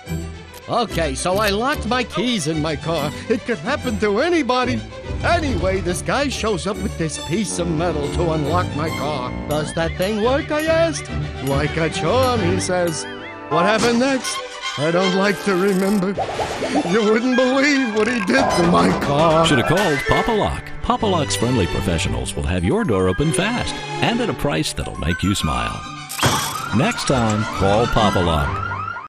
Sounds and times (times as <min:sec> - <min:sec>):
Music: 0:00.0 - 0:29.0
Speech: 0:00.7 - 0:13.0, 0:13.6 - 0:16.2, 0:16.9 - 0:25.8, 0:26.8 - 0:28.6.